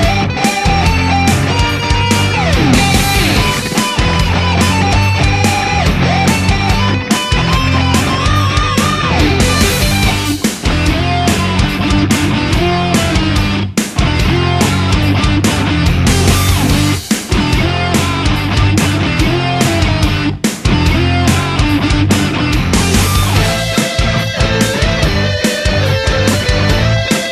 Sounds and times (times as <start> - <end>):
Progressive rock: 0.0 - 27.3.